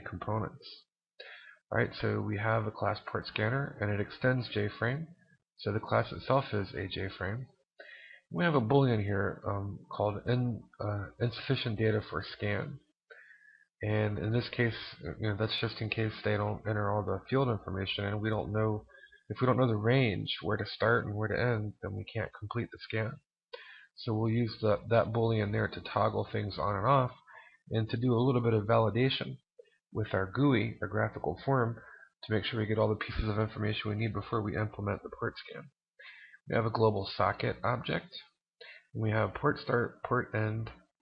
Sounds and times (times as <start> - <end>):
Speech: 0.0 - 7.6, 8.2 - 41.0.